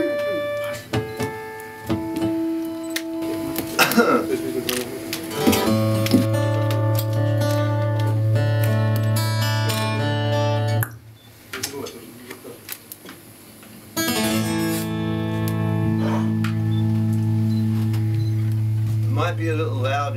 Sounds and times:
Music: 0:00.0 - 0:10.9, 0:14.0 - 0:20.1
Speech: 0:04.2 - 0:05.1, 0:11.6 - 0:12.7, 0:19.1 - 0:20.1.

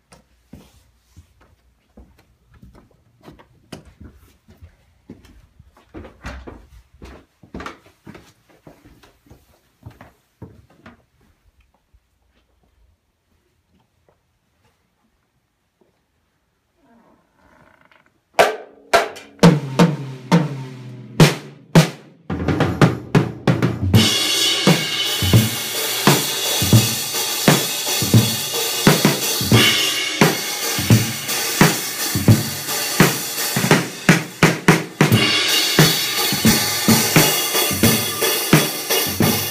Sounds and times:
Music: 0:18.5 - 0:39.5.

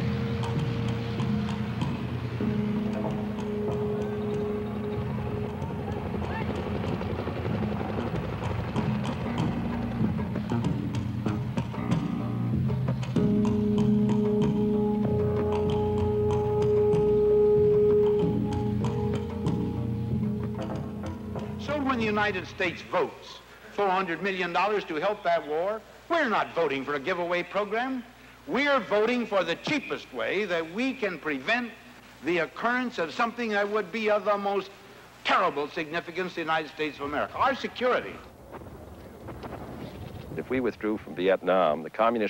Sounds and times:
Music: 0:00.0 - 0:22.9
Speech: 0:21.6 - 0:38.3, 0:40.4 - 0:42.2.

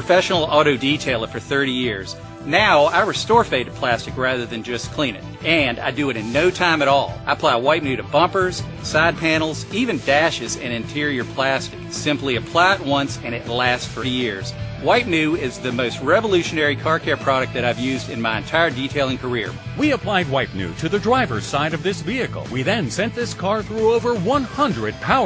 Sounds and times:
Music: 0:00.0 - 0:25.2
Speech: 0:00.0 - 0:25.2.

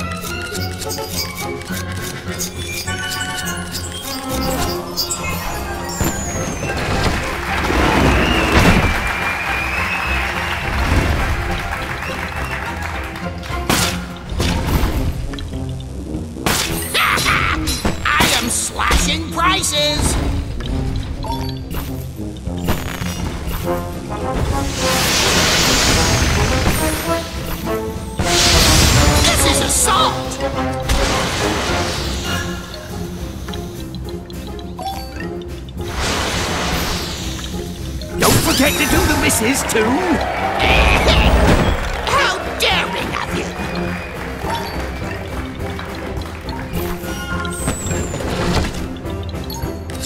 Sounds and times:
Music: 0:00.0 - 0:50.0
Speech: 0:17.0 - 0:20.2, 0:38.2 - 0:41.3, 0:42.1 - 0:43.5.

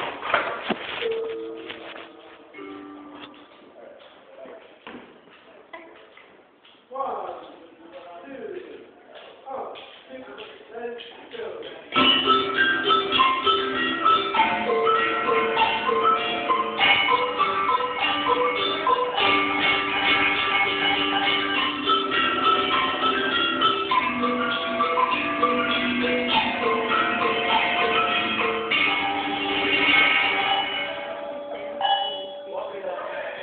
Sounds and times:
Cowbell: 0:12.0 - 0:32.9.

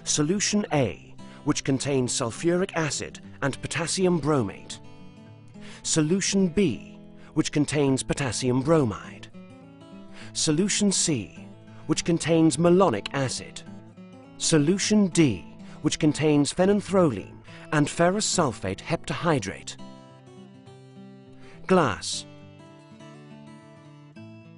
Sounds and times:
Speech: 0:00.0 - 0:04.8, 0:05.8 - 0:09.3, 0:10.3 - 0:13.7, 0:14.4 - 0:19.8, 0:21.6 - 0:22.3
Music: 0:00.0 - 0:24.5.

